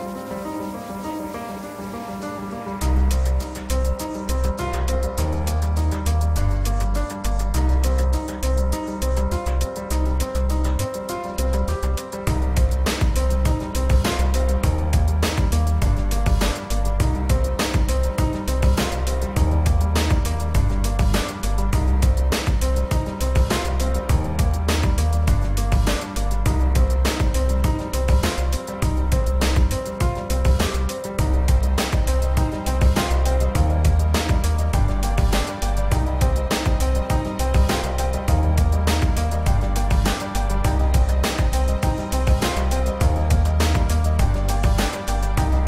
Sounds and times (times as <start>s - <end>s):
Music: 0.0s - 45.6s.